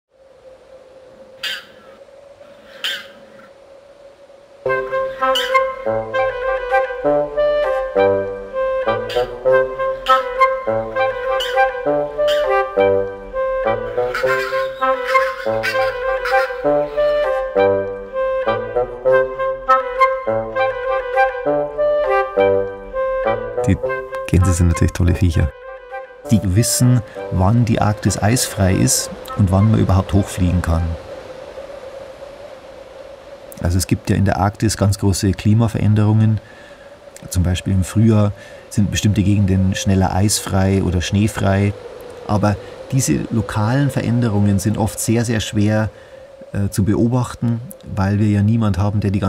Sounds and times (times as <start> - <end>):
Goose: 1.4 - 2.0, 2.6 - 3.3, 5.1 - 5.8, 9.0 - 10.4, 11.2 - 12.6, 13.9 - 17.4.